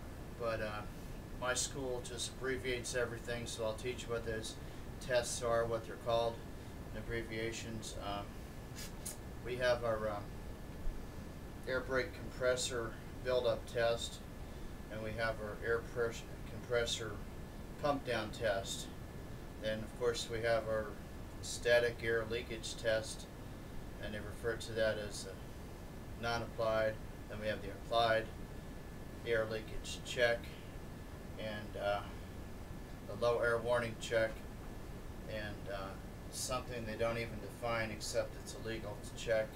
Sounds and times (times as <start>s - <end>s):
Speech: 0.4s - 8.3s, 9.4s - 10.3s, 11.7s - 14.3s, 14.9s - 17.2s, 17.8s - 19.0s, 19.6s - 23.3s, 24.0s - 25.4s, 26.2s - 28.4s, 29.2s - 30.6s, 31.4s - 32.2s, 33.1s - 34.5s, 35.3s - 39.5s.